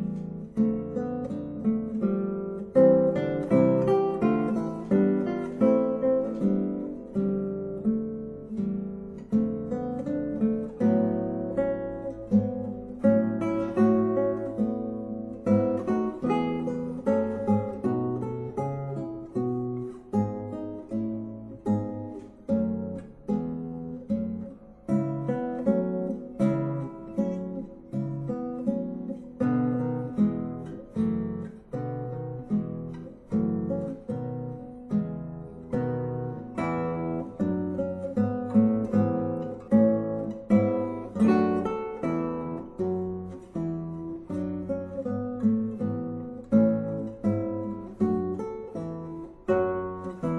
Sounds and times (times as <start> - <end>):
Acoustic guitar: 0.0 - 50.3.